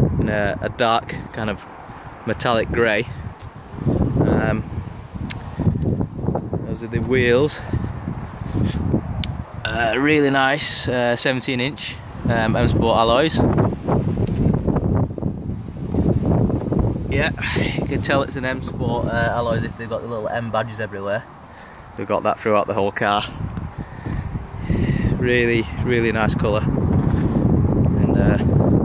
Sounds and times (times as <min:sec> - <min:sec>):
Speech: 0:00.2 - 0:01.7, 0:02.3 - 0:03.1, 0:04.2 - 0:04.7, 0:06.7 - 0:07.7, 0:09.7 - 0:13.5, 0:17.1 - 0:21.3, 0:22.0 - 0:23.4, 0:25.2 - 0:26.7, 0:28.0 - 0:28.5.